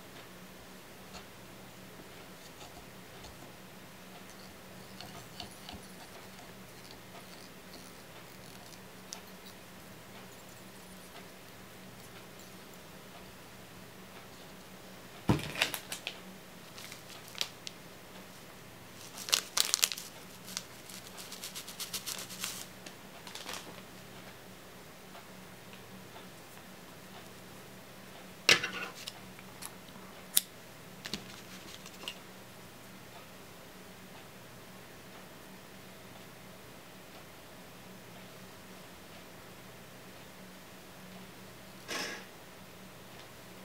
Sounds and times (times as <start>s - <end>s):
Crumpling, crinkling: 15.5s - 17.8s, 19.0s - 23.8s.